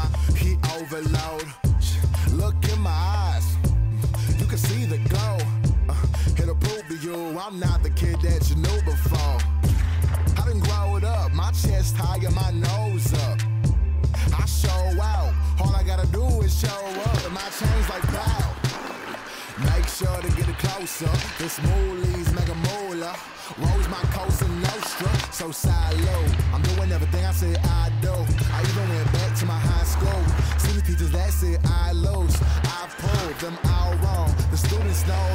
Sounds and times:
Music: 0.0 - 35.3.

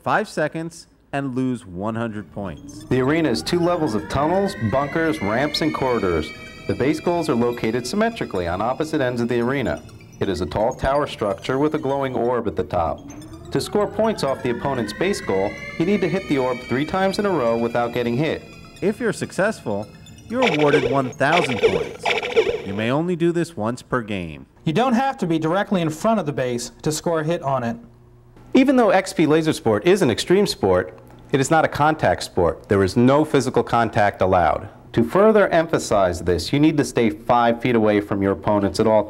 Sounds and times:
Speech: 0.0 - 22.0, 22.7 - 27.9, 28.6 - 39.1.

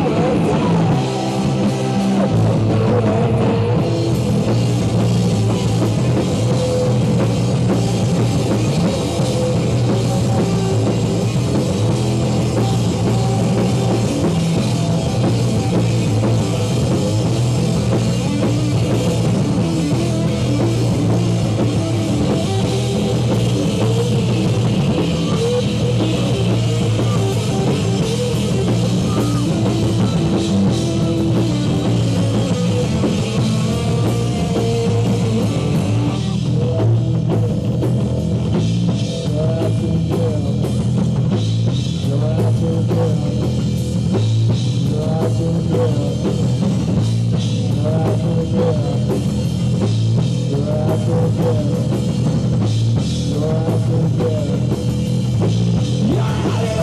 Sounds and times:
Rock music: 0.0 - 56.8.

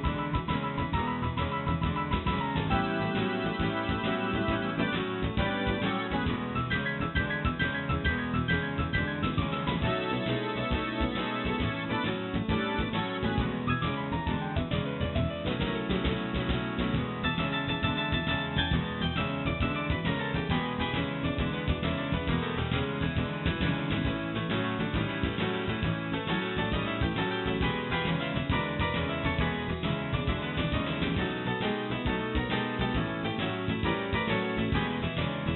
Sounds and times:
Music: 0.0 - 35.5.

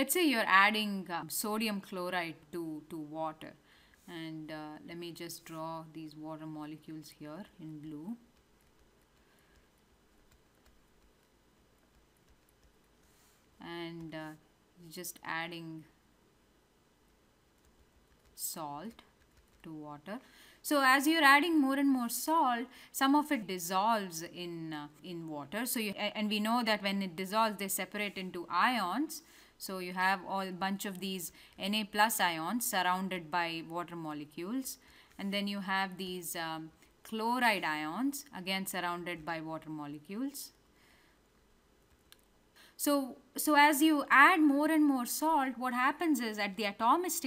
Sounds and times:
Speech: 0.0 - 8.2, 13.6 - 15.9, 18.4 - 19.0, 19.7 - 40.6, 42.8 - 47.2.

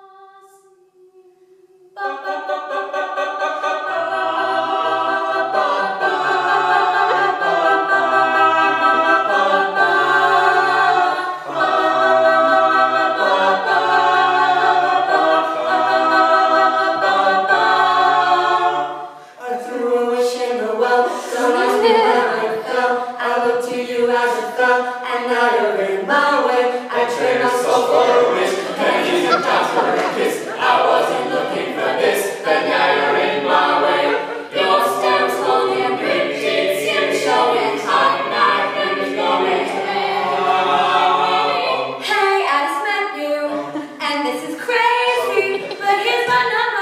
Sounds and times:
A capella: 0.0 - 46.8.

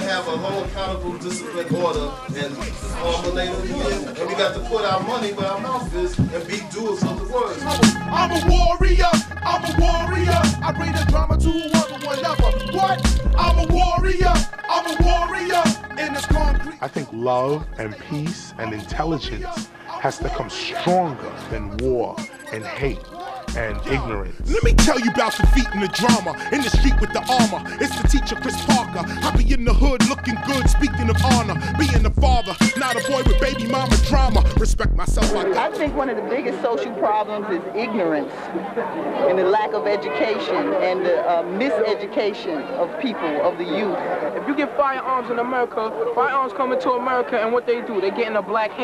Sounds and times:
Hip hop music: 0.0 - 38.2, 39.2 - 48.8.

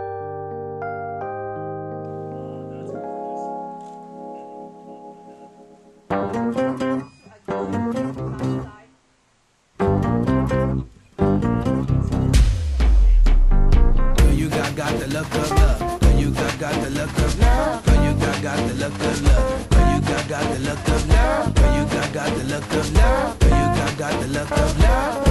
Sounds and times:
Speech: 2.4 - 3.6, 7.3 - 9.0
Bass guitar: 9.8 - 25.3.

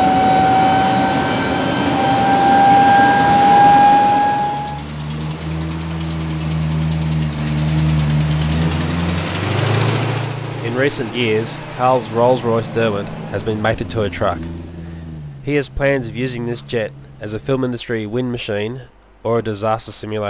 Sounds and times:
Vehicle: 0.0 - 19.2
Speech: 10.6 - 14.5, 15.4 - 20.3.

